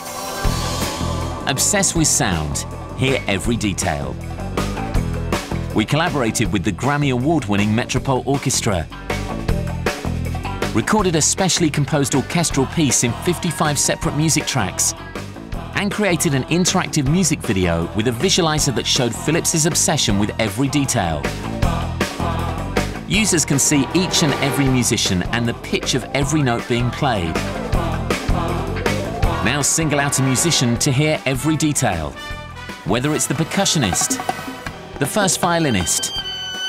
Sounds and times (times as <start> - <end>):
Music: 0.0 - 36.6
Speech: 1.5 - 4.2, 5.8 - 8.9, 10.8 - 15.0, 15.8 - 21.3, 23.1 - 27.5, 29.4 - 32.2, 32.9 - 34.3, 35.0 - 36.2.